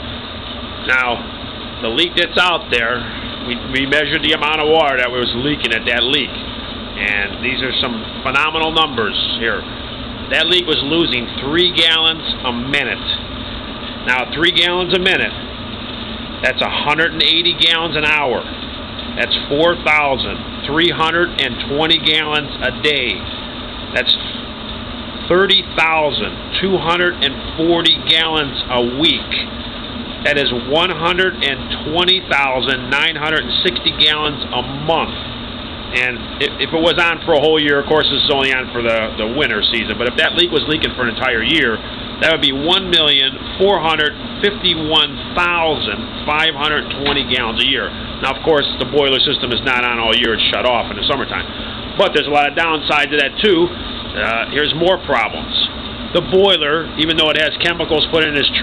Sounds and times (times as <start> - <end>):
Speech: 0.8 - 6.4, 7.0 - 9.7, 10.3 - 13.2, 14.0 - 15.4, 16.4 - 18.5, 19.2 - 23.3, 24.0 - 24.3, 25.3 - 29.5, 30.2 - 35.2, 35.9 - 58.6.